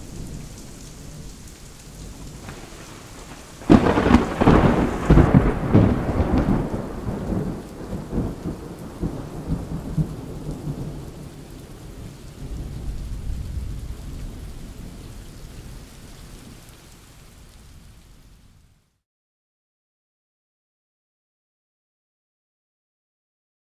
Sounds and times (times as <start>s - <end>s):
Rain on surface: 0.0s - 19.0s
Thunder: 2.0s - 11.2s, 12.0s - 15.0s.